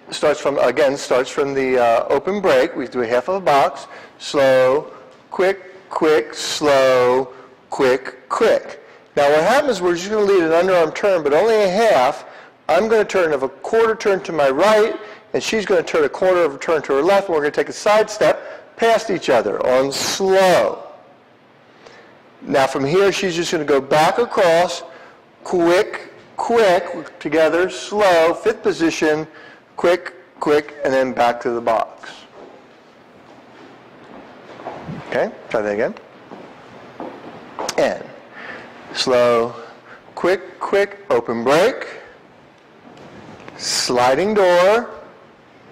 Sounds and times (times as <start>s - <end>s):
Speech: 0.1s - 21.0s, 22.4s - 32.4s, 35.1s - 36.1s, 37.7s - 38.2s, 38.9s - 42.1s, 43.6s - 45.1s.